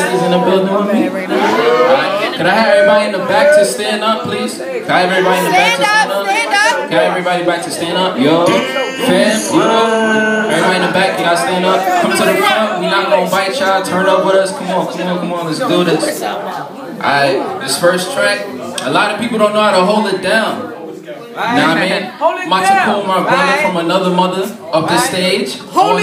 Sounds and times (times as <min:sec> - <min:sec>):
Speech: 0:00.0 - 0:26.0.